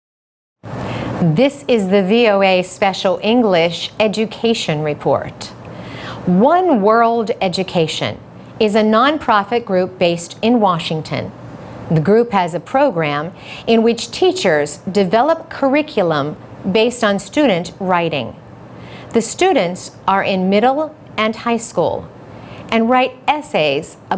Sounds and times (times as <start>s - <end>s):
Speech: 1.2s - 5.6s, 6.3s - 18.4s, 19.1s - 22.1s, 22.7s - 24.1s.